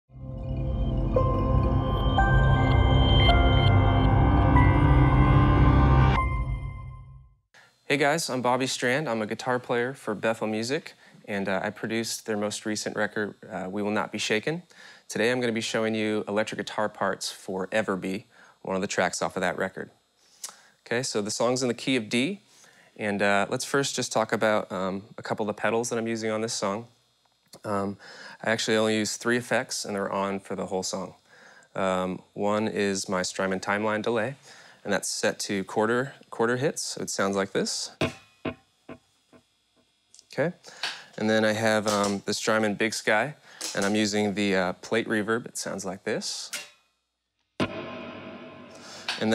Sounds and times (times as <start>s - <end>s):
Speech: 7.9s - 20.0s, 20.8s - 22.4s, 23.0s - 27.0s, 27.6s - 31.2s, 31.8s - 38.0s, 40.2s - 46.7s.